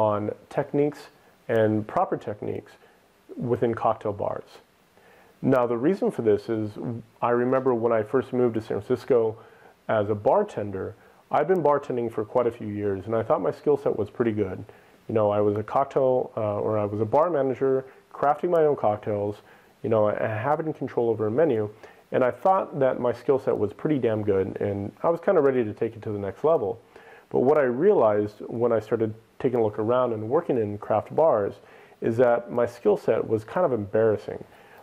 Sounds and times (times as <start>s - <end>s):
Speech: 0.0s - 4.7s, 5.4s - 34.8s.